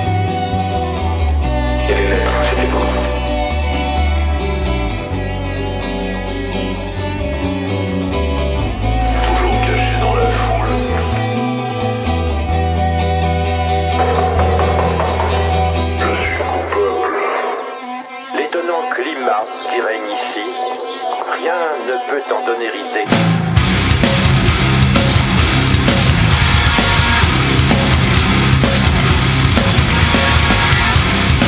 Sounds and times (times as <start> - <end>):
Music: 0.0 - 31.4.